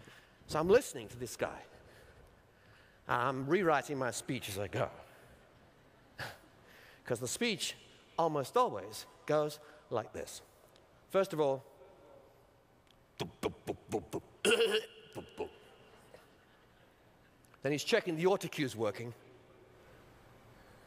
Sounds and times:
Narration, monologue: 0.0 - 19.9
Male speech, man speaking: 0.5 - 1.7, 3.1 - 5.1, 7.1 - 10.5, 11.1 - 12.3, 17.6 - 19.2.

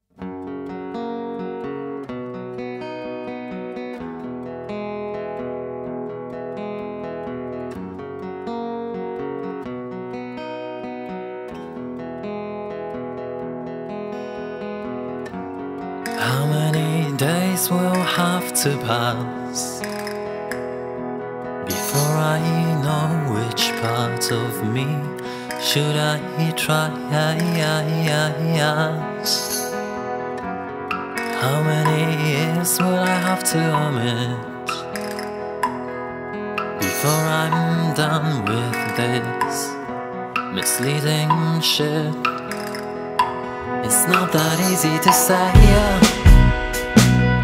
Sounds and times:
Tender music: 28.9 - 47.4.

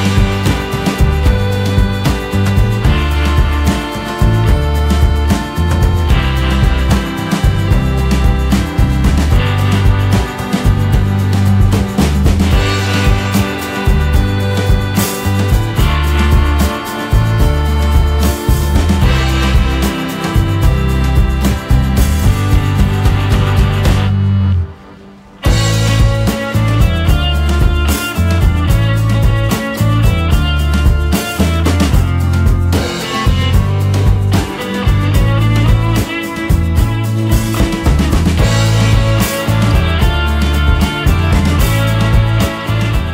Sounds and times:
Music: 0.0 - 43.1.

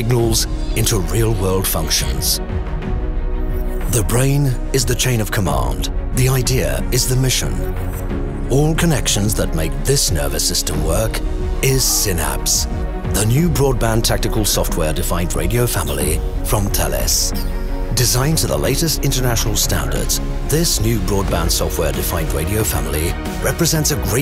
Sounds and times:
Speech: 0.0 - 2.4, 3.8 - 7.7, 8.5 - 24.2
Music: 0.0 - 24.2.

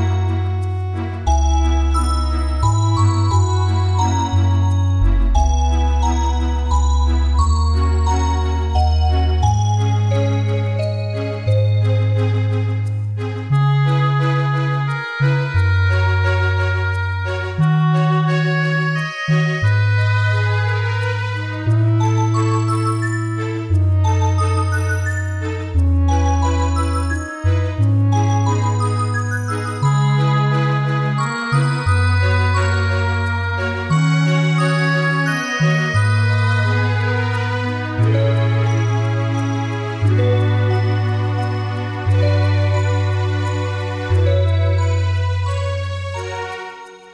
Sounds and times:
Background music: 0.0 - 47.1.

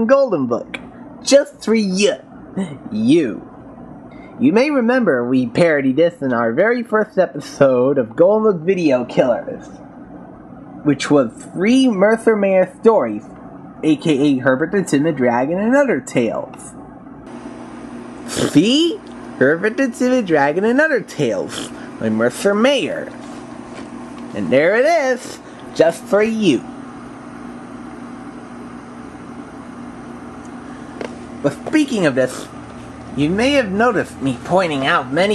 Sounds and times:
Speech: 0.0 - 3.5, 4.4 - 9.7, 10.8 - 16.8, 18.4 - 23.2, 24.3 - 26.7, 31.4 - 32.5, 33.1 - 35.3.

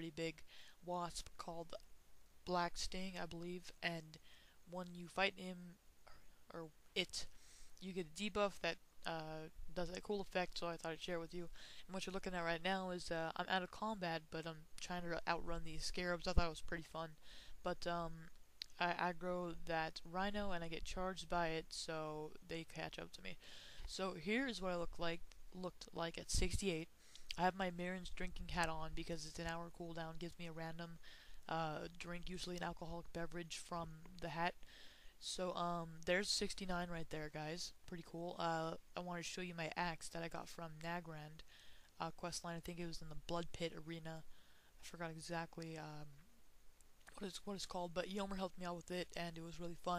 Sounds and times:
Speech: 0.0 - 34.6, 35.2 - 41.4, 42.0 - 46.2, 47.1 - 49.9.

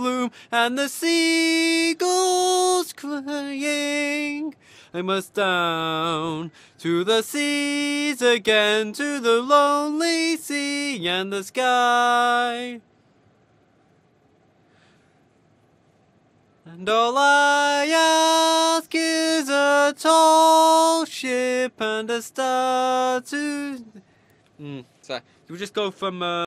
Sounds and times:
Speech: 24.6 - 26.4.

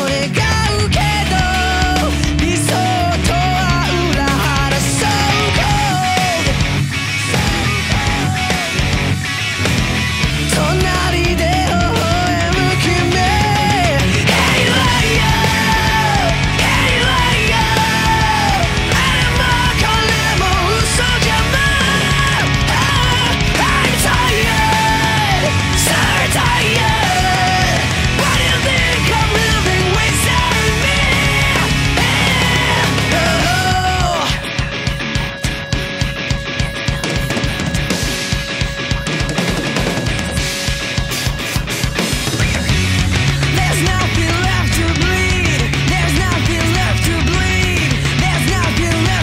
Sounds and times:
Singing: 0.0 - 9.4, 10.5 - 34.6
Music: 0.0 - 49.2.

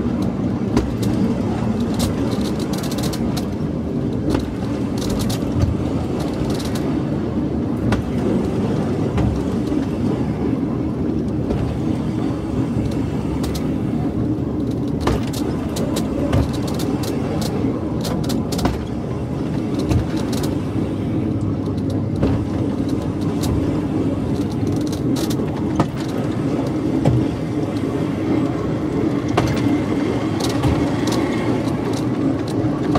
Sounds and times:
Outside, rural or natural: 0.0 - 32.9
Train: 0.0 - 32.9.

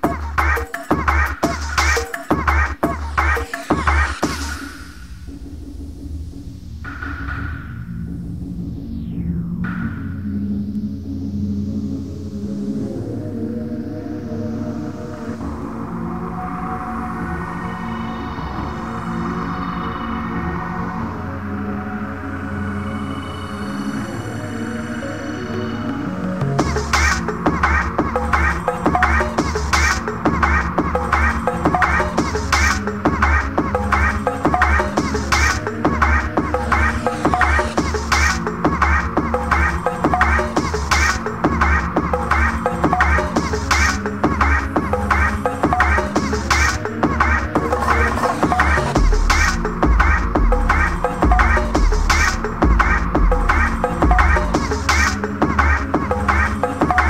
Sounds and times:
Electronic music: 0.0 - 57.0.

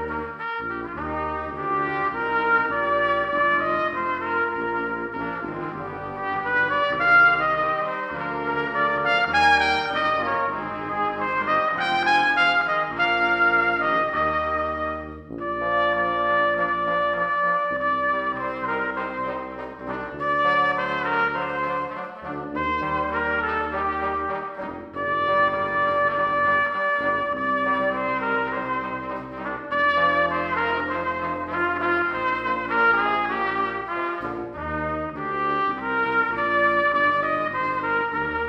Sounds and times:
Trumpet: 0.0 - 38.4.

